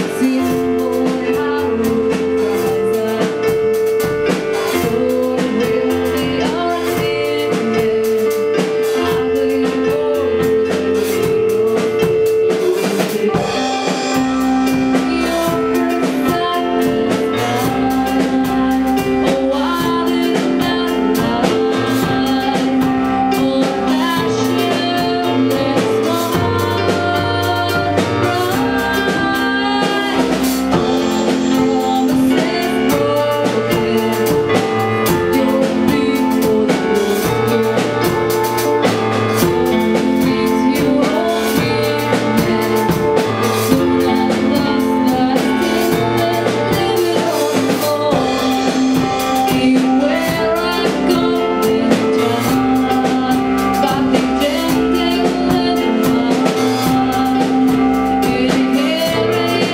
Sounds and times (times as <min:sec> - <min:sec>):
Music: 0:00.0 - 0:59.7.